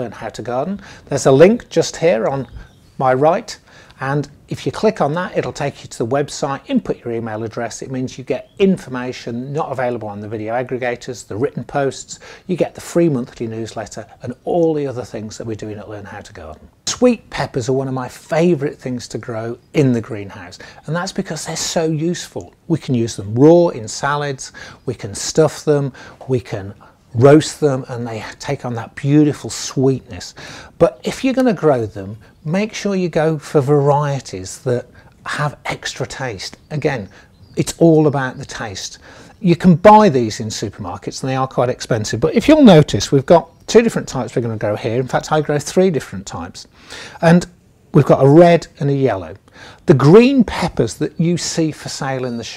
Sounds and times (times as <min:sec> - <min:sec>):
Speech: 0:00.0 - 0:52.5.